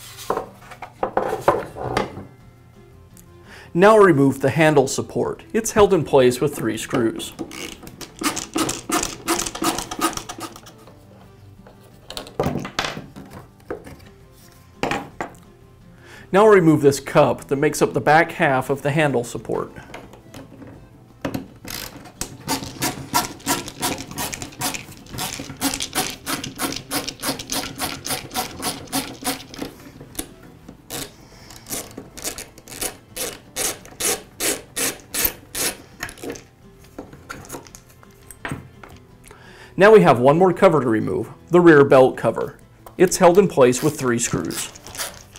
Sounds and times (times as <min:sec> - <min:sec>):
Music: 0:00.0 - 0:45.3
Tools: 0:07.4 - 0:10.9, 0:19.9 - 0:30.3, 0:30.9 - 0:39.0.